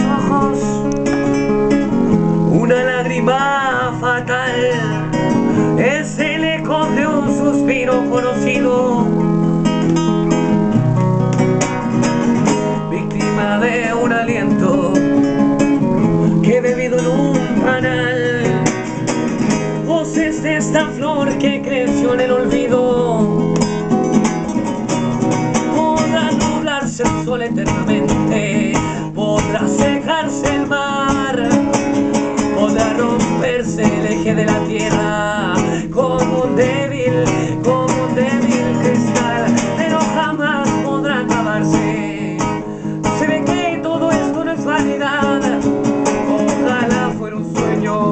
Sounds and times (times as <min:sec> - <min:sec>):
Music: 0:00.0 - 0:48.1.